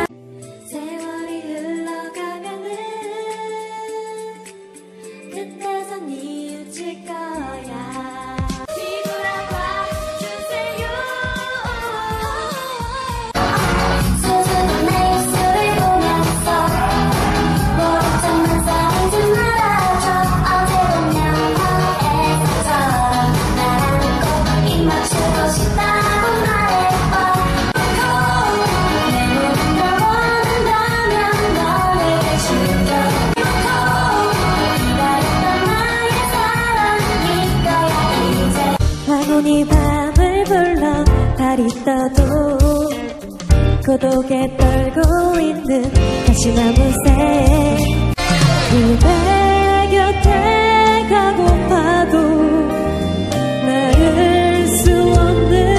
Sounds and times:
Music: 0:00.0 - 0:55.7
Female singing: 0:00.7 - 0:04.5, 0:05.3 - 0:43.2, 0:43.8 - 0:48.1, 0:48.7 - 0:52.8, 0:53.6 - 0:55.7.

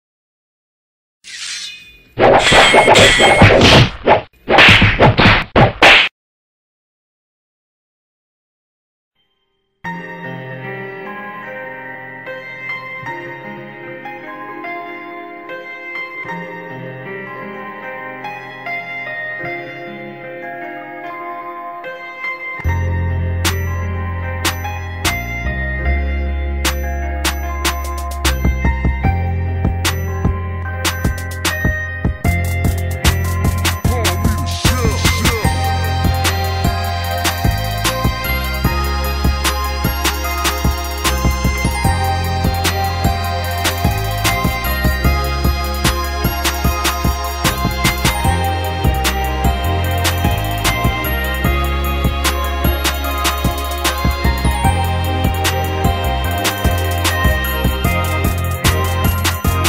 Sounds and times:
Whack, thwack: 0:02.2 - 0:06.1.

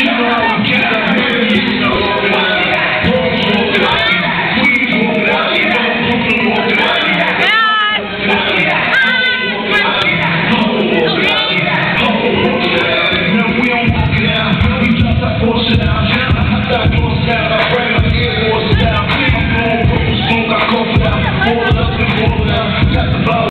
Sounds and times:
Music: 0:00.0 - 0:23.5.

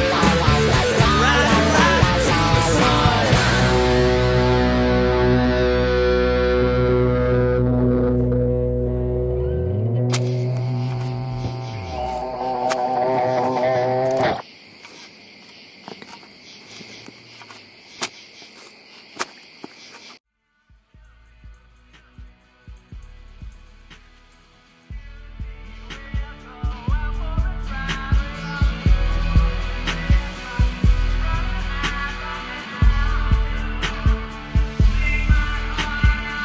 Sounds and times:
Fly, housefly: 0:10.1 - 0:20.2
Cricket: 0:10.2 - 0:20.2.

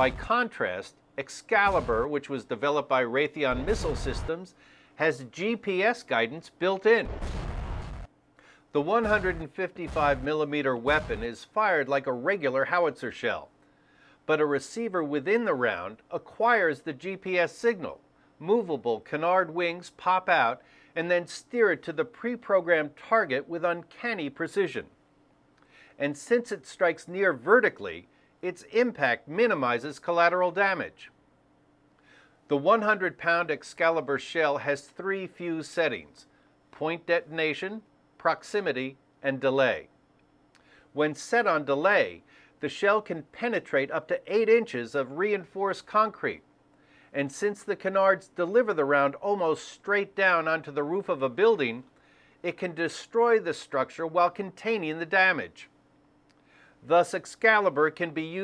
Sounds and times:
Artillery fire: 0:01.7 - 0:02.1, 0:03.5 - 0:04.3, 0:07.0 - 0:08.1, 0:09.0 - 0:11.3.

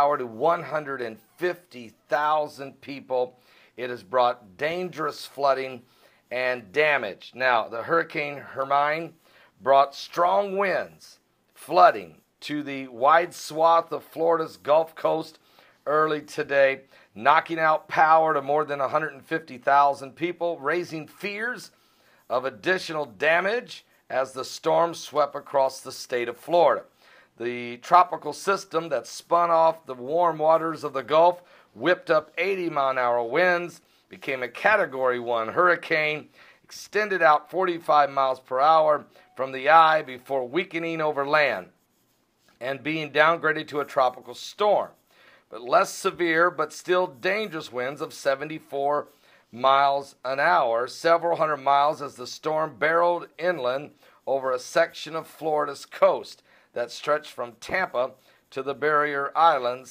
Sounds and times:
Speech: 0:00.0 - 0:41.8, 0:42.6 - 0:59.9.

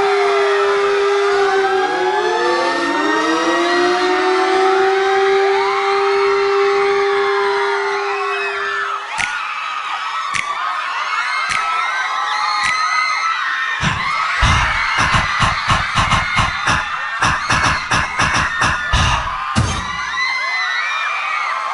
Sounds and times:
Music: 0:13.8 - 0:20.0.

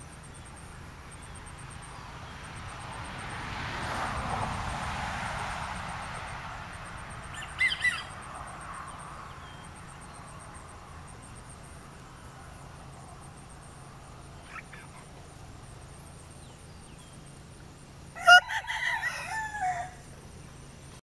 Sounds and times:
Crowing, cock-a-doodle-doo: 0:18.2 - 0:20.1.

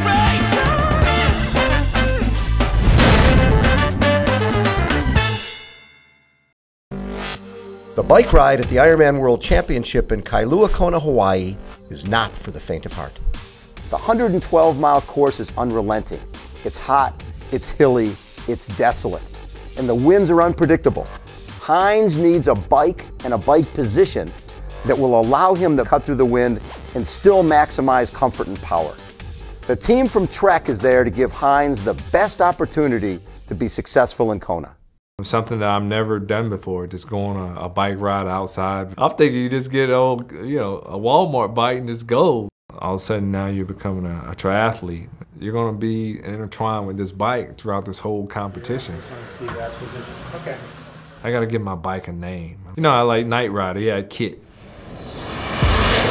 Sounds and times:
Music: 0:00.0 - 0:54.2
Speech: 0:08.0 - 0:13.2, 0:13.9 - 0:19.2, 0:19.8 - 0:29.0, 0:29.7 - 0:54.4.

